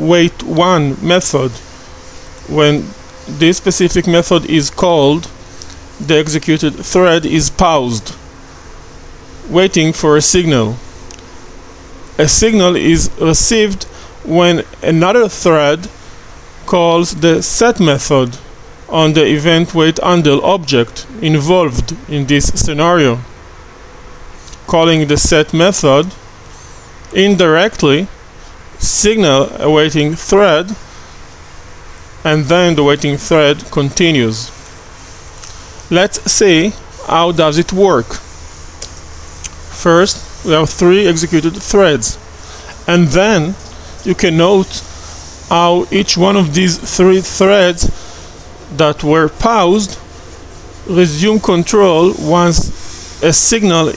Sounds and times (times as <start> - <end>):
Speech: 0.0 - 1.7, 2.5 - 5.4, 6.0 - 8.2, 9.4 - 10.9, 12.2 - 16.0, 16.7 - 23.3, 24.6 - 26.2, 27.1 - 28.2, 28.8 - 30.8, 32.2 - 34.6, 35.9 - 38.3, 39.7 - 44.9, 45.5 - 48.0, 48.7 - 50.0, 50.9 - 53.9.